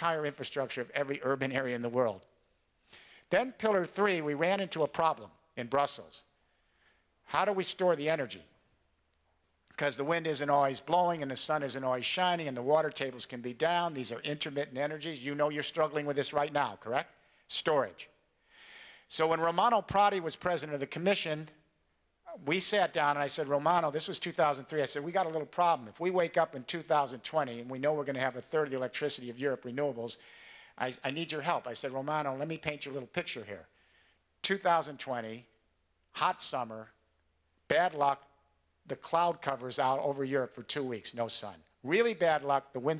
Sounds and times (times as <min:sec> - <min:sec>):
Male speech, man speaking: 0:00.0 - 0:02.3, 0:03.3 - 0:06.3, 0:07.3 - 0:08.5, 0:09.8 - 0:18.1, 0:19.1 - 0:21.6, 0:22.3 - 0:30.2, 0:30.8 - 0:33.7, 0:34.4 - 0:35.5, 0:36.2 - 0:37.0, 0:37.7 - 0:38.3, 0:38.9 - 0:42.9
Narration, monologue: 0:00.0 - 0:42.9.